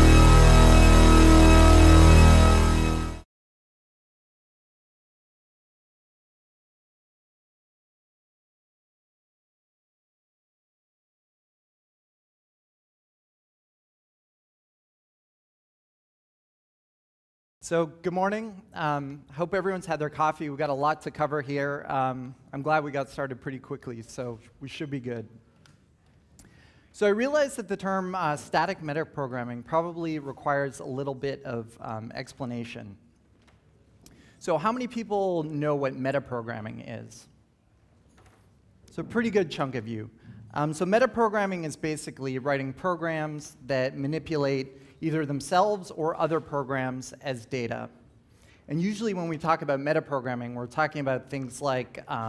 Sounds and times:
Speech: 17.6 - 25.4, 27.0 - 33.0, 34.4 - 37.3, 38.9 - 48.0, 48.7 - 52.2.

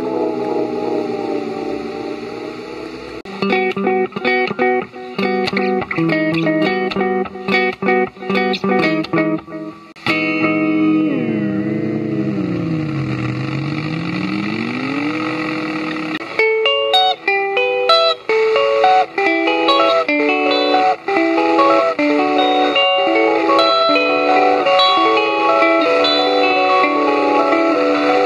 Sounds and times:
Tapping (guitar technique): 3.3 - 28.2.

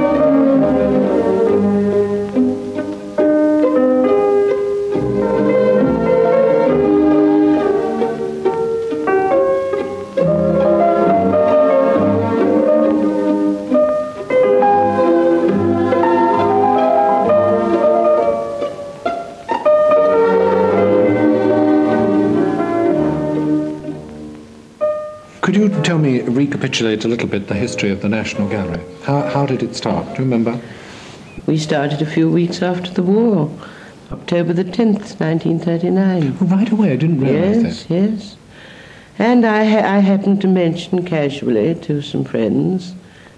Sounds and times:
Classical music: 0.0 - 33.6, 34.2 - 38.2
Piano: 0.0 - 43.3.

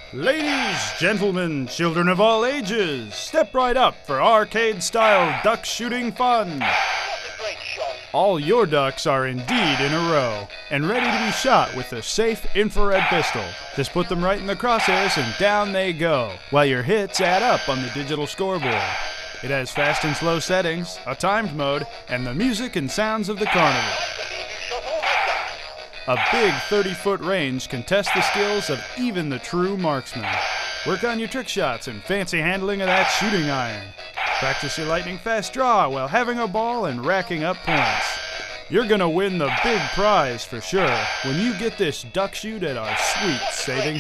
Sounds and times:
Music: 0.0 - 44.0
Speech: 0.2 - 6.6, 7.7 - 18.8, 19.4 - 24.0, 26.1 - 30.3, 30.9 - 38.1, 38.7 - 44.0.

